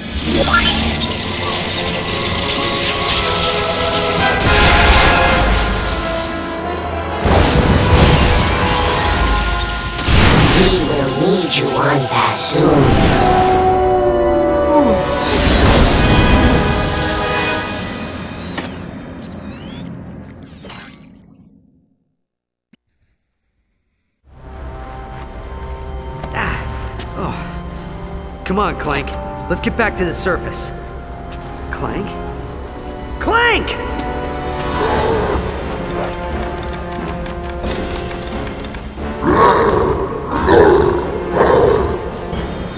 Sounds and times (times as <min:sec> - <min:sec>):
Music: 0:00.0 - 0:20.5, 0:24.2 - 0:42.7.